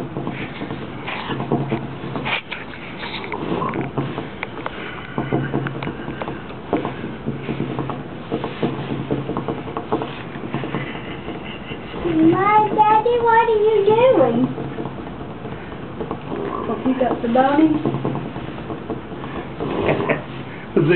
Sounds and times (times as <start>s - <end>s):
Speech: 12.1s - 14.5s.